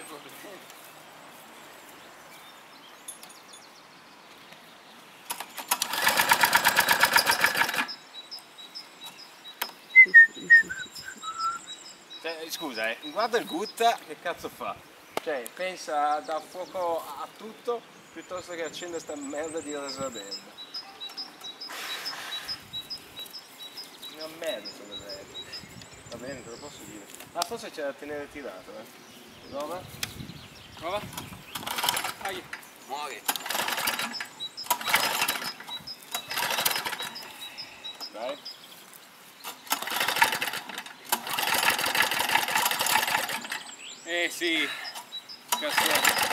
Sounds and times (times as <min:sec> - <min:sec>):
Speech: 0:00.0 - 0:00.7, 0:12.2 - 0:20.5, 0:24.1 - 0:25.3, 0:26.1 - 0:28.9, 0:38.1 - 0:38.4, 0:44.1 - 0:44.8, 0:45.6 - 0:46.1
Environmental noise: 0:00.0 - 0:46.3.